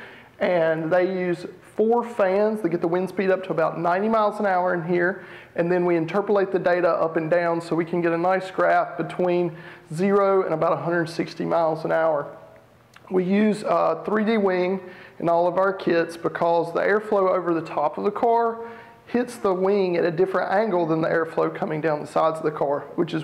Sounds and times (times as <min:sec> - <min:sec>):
Speech: 0:00.4 - 0:23.2.